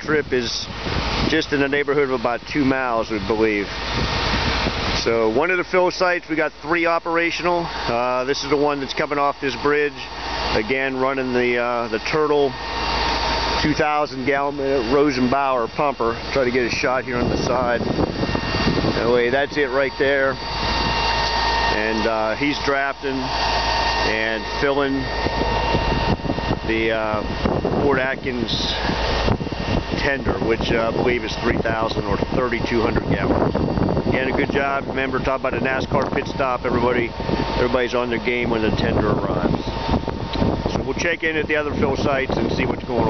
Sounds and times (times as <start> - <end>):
Speech: 0.0 - 0.7, 1.3 - 3.7, 5.0 - 12.6, 13.6 - 17.9, 18.9 - 20.4, 21.7 - 23.3, 24.0 - 25.1, 26.7 - 28.9, 30.0 - 33.4, 34.1 - 39.6, 40.7 - 43.1
Outside, rural or natural: 0.0 - 43.1.